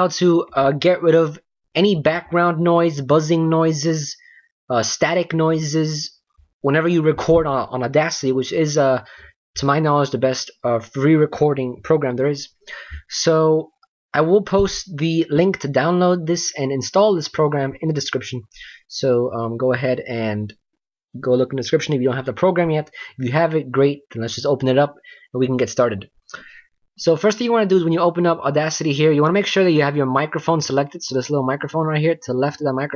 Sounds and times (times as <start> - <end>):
Speech: 0.0 - 20.6, 21.2 - 26.2, 27.0 - 32.9.